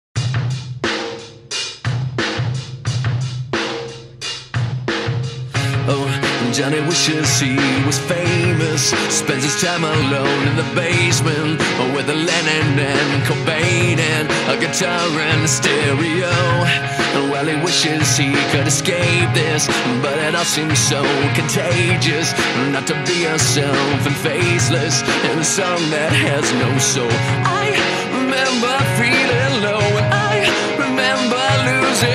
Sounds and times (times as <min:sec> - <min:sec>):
Bass drum: 0:00.2 - 0:32.1
Drum kit: 0:00.2 - 0:32.1.